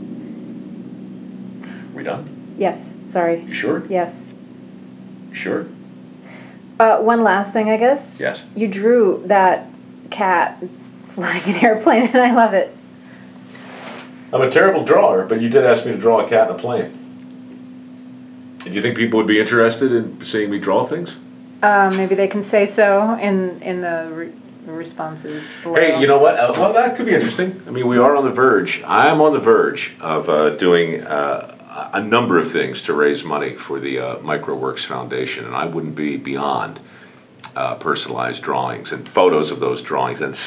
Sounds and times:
Speech: 0:01.7 - 0:04.3, 0:05.4 - 0:05.8, 0:06.8 - 0:12.7, 0:14.4 - 0:17.0, 0:18.6 - 0:36.9, 0:37.5 - 0:40.4.

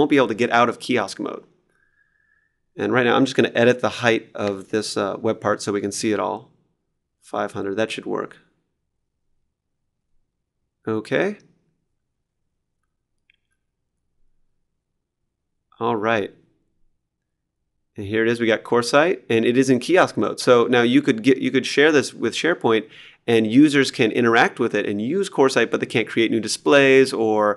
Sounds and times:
Speech: 0:00.0 - 0:01.5, 0:02.8 - 0:06.5, 0:07.2 - 0:08.5, 0:10.8 - 0:11.6, 0:15.8 - 0:16.5, 0:18.0 - 0:27.5
Inside, small room: 0:00.0 - 0:27.5.

